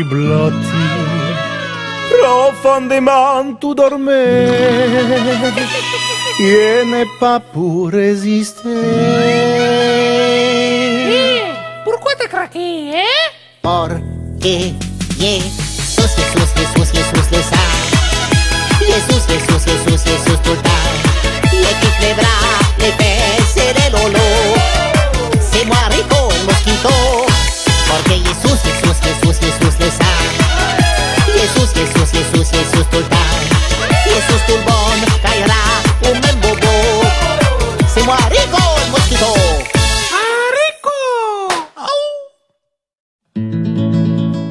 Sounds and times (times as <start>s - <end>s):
Music: 0.0s - 40.3s, 43.3s - 44.5s.